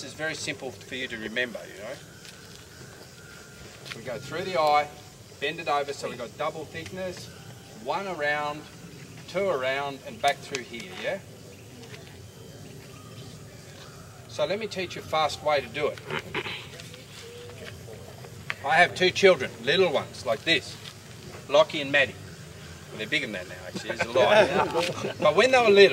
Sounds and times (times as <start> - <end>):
Outside, urban or manmade: 0.0 - 25.9.